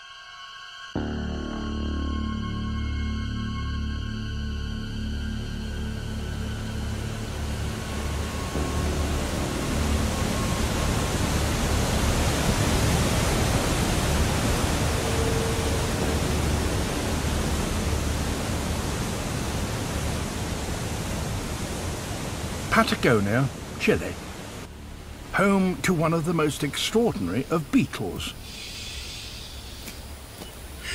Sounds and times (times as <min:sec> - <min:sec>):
Outside, rural or natural: 0:00.0 - 0:30.9
Pink noise: 0:06.0 - 0:30.9.